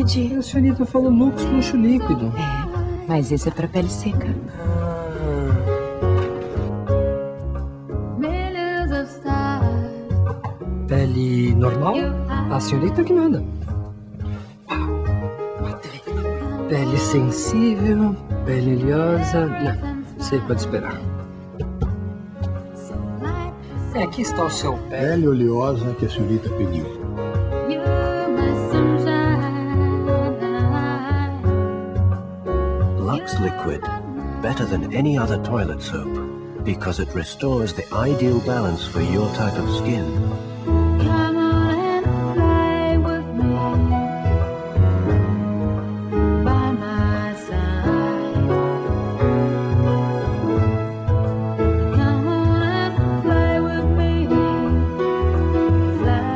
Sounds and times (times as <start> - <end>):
Music: 0.0 - 56.3.